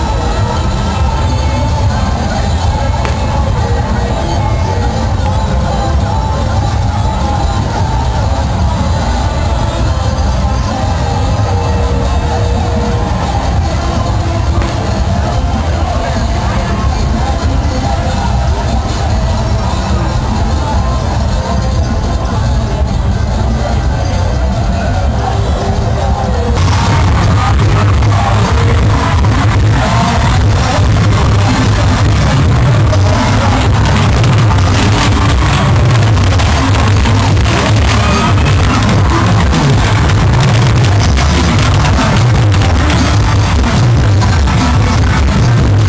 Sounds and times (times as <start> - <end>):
Music: 0.0 - 45.8
Speech: 0.0 - 45.8.